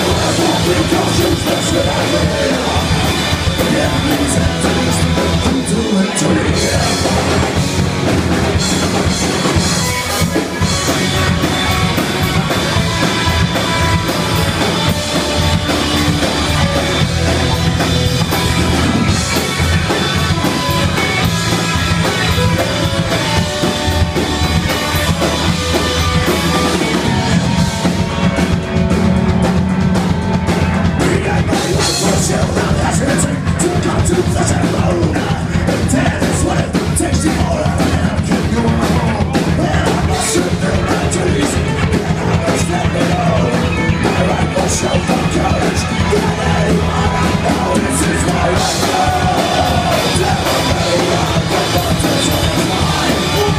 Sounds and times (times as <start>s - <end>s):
Music: 0.0s - 53.5s.